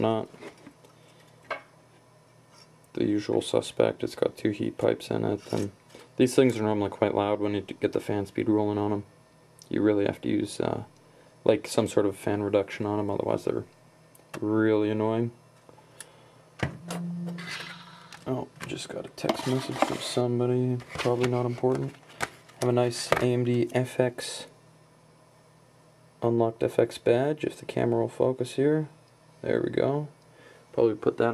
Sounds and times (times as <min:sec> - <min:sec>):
Speech: 0:00.0 - 0:00.4, 0:02.9 - 0:13.8, 0:14.4 - 0:15.4, 0:18.3 - 0:22.0, 0:22.6 - 0:24.6, 0:26.2 - 0:31.3.